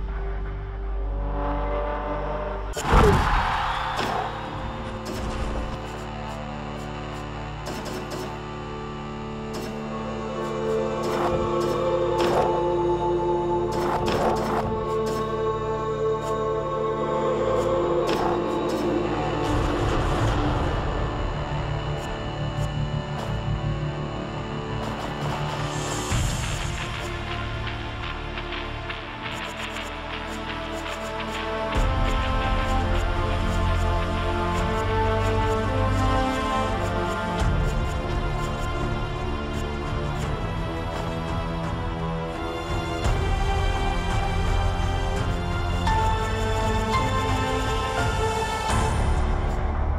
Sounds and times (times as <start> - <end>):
Music: 0.0 - 49.9.